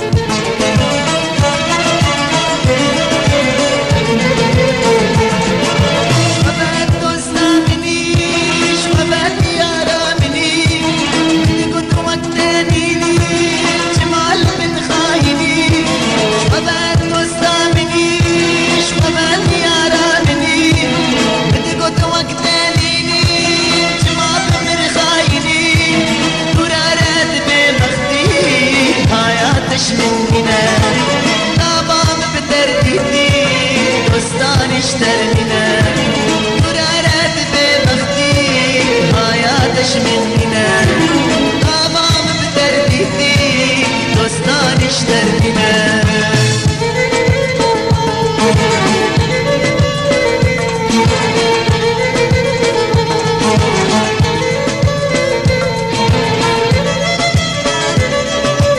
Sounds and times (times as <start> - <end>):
Music of Bollywood: 0.0 - 58.7.